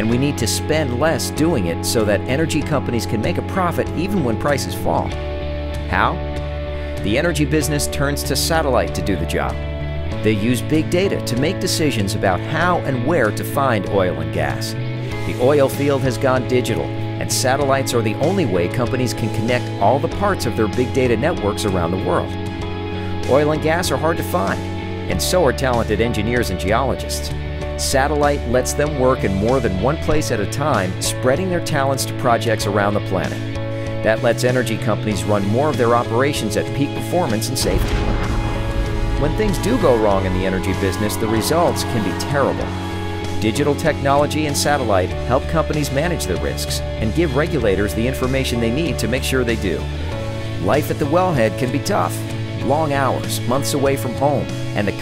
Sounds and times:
Speech: 0.0s - 5.2s, 5.9s - 6.2s, 7.0s - 9.6s, 10.2s - 22.4s, 23.2s - 33.4s, 34.0s - 38.1s, 39.1s - 42.8s, 43.4s - 49.9s, 50.6s - 55.0s
Music: 0.0s - 55.0s.

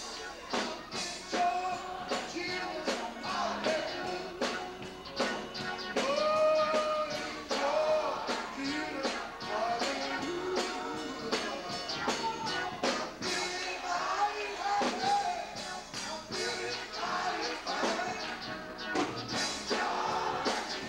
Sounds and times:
Music: 0.0s - 20.8s
Male singing: 1.3s - 4.6s, 6.0s - 11.8s, 13.2s - 15.6s, 16.4s - 18.4s.

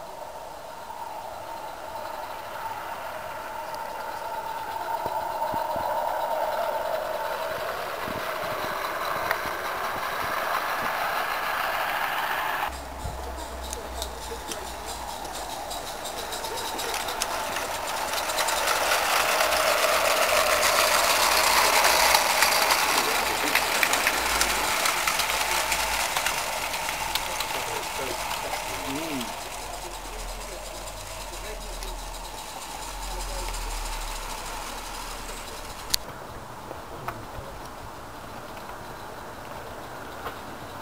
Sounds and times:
Hiss: 0.0s - 36.1s.

